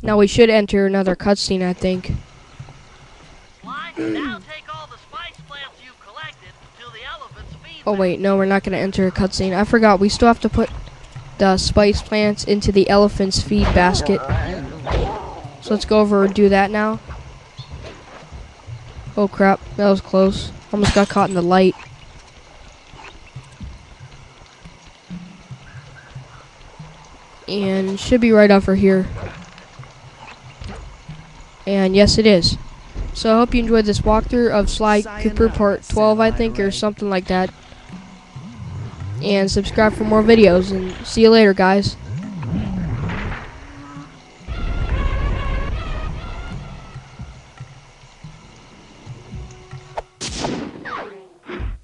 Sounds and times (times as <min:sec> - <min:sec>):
Speech: 0:03.7 - 0:10.7, 0:11.4 - 0:14.9, 0:33.2 - 0:37.5, 0:39.2 - 0:42.0.